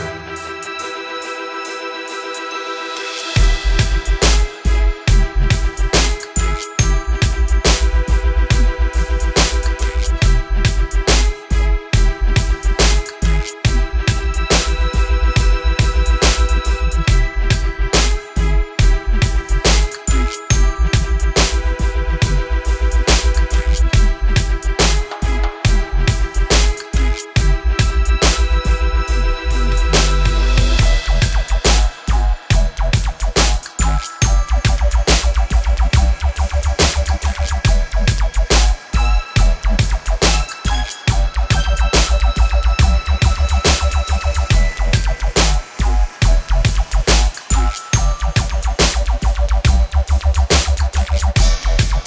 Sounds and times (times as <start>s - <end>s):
Dubstep: 0.0s - 52.0s.